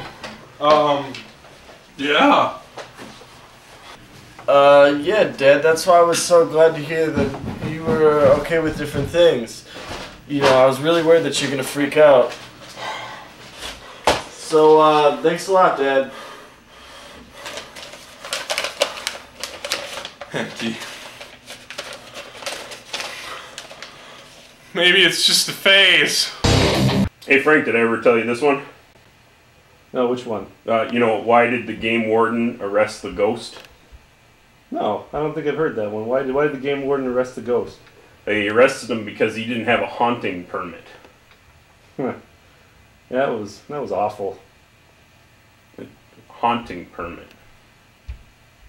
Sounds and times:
Speech: 0.6 - 1.2, 2.0 - 2.6, 4.5 - 9.7, 10.3 - 12.4, 14.4 - 16.1, 20.3 - 20.9, 24.7 - 26.4, 27.2 - 28.8, 29.9 - 33.7, 34.7 - 41.1, 42.0 - 42.3, 43.1 - 44.5, 45.8 - 47.4
Music: 26.4 - 27.1.

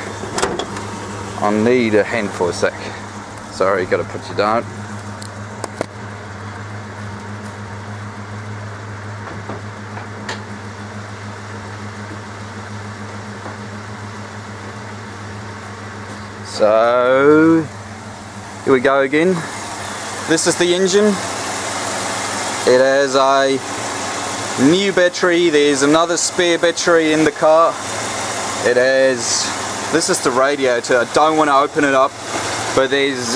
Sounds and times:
Car: 0.0 - 33.3
Outside, urban or manmade: 0.0 - 33.3.

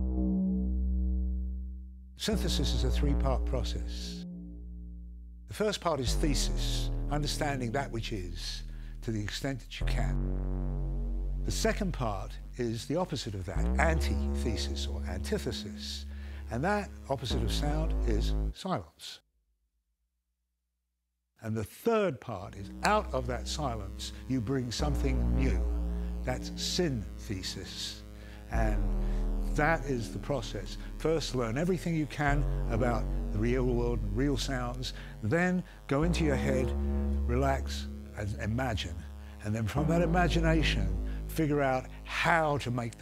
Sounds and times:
Music: 0.0 - 18.6, 22.5 - 43.0
Speech: 2.2 - 4.2, 5.5 - 10.2, 11.5 - 19.2, 21.4 - 43.0.

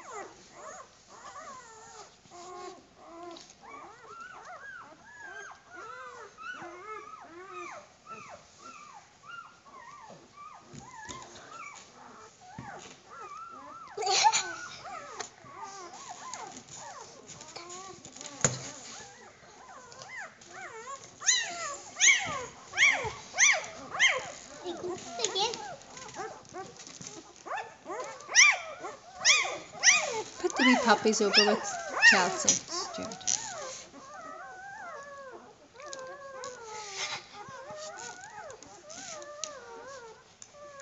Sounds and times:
Dog: 0.0 - 40.8
Chuckle, chortle: 14.0 - 14.8.

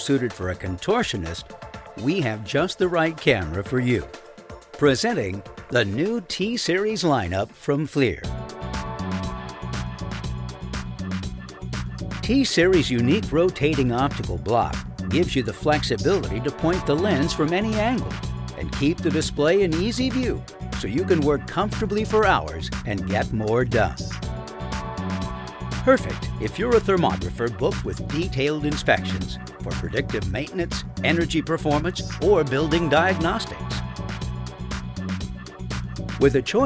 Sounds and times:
Speech: 0.0 - 1.4, 2.0 - 4.1, 4.8 - 8.3, 12.2 - 24.1, 25.9 - 33.8, 36.2 - 36.6
Music: 0.0 - 36.6.

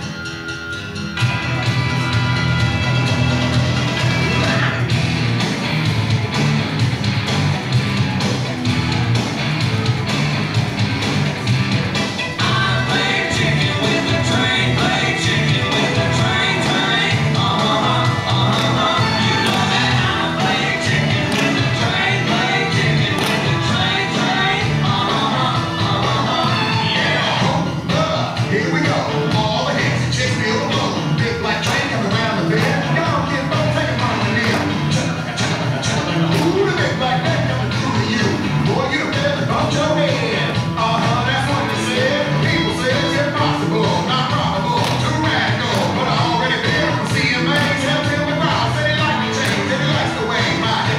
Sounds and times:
Country: 7.3 - 50.9.

